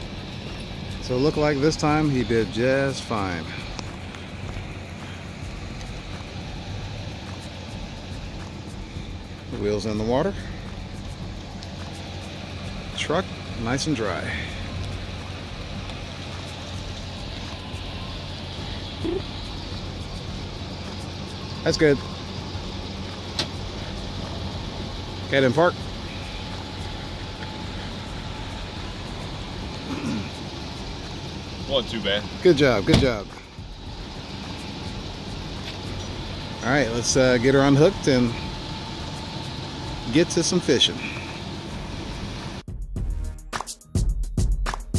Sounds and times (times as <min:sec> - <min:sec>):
Car: 0:00.0 - 0:42.7
Outside, rural or natural: 0:00.0 - 0:44.9
Speech: 0:01.0 - 0:03.7, 0:09.5 - 0:10.4, 0:12.9 - 0:14.6, 0:21.6 - 0:22.0, 0:25.3 - 0:25.8, 0:31.6 - 0:33.4, 0:36.6 - 0:38.5, 0:40.1 - 0:41.3.